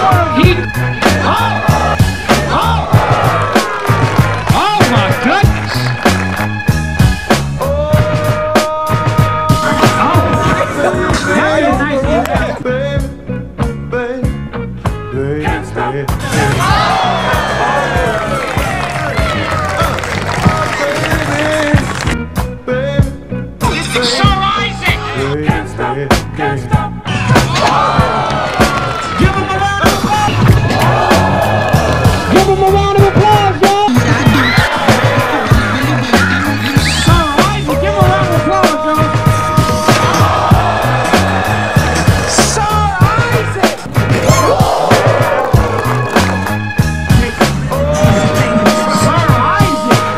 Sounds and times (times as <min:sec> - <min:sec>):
Music: 0:00.0 - 0:50.1.